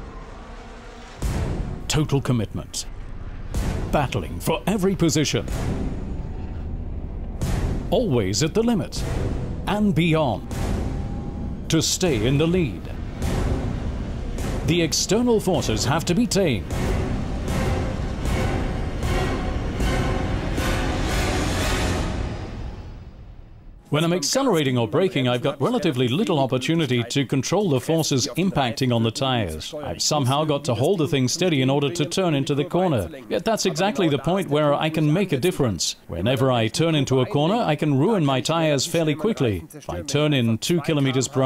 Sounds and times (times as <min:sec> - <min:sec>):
Music: 0:00.0 - 0:24.0
Speech: 0:01.9 - 0:02.9, 0:03.9 - 0:05.6, 0:07.9 - 0:09.1, 0:09.7 - 0:10.4, 0:11.7 - 0:13.0, 0:14.6 - 0:16.7, 0:23.9 - 0:41.4.